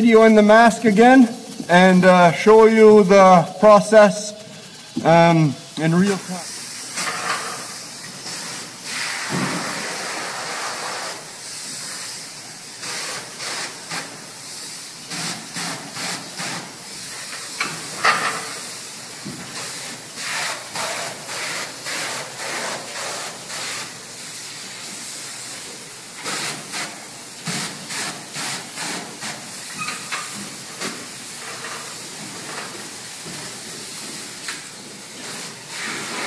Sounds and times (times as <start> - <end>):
Spray: 0.0 - 36.2.